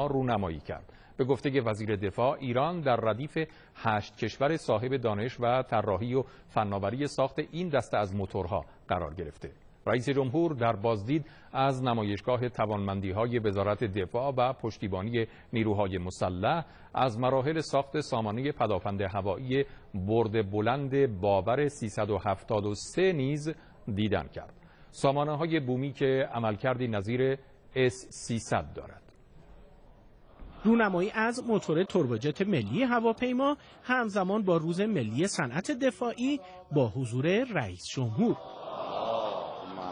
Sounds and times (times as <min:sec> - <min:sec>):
Speech: 0:00.0 - 0:29.1, 0:30.6 - 0:38.4.